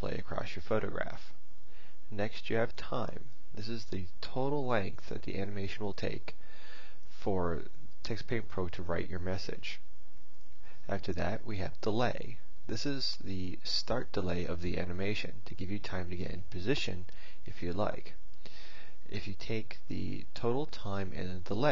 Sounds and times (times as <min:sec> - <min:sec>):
Speech: 0:00.0 - 0:01.4, 0:02.1 - 0:06.4, 0:07.1 - 0:09.9, 0:10.8 - 0:18.2, 0:19.1 - 0:21.7.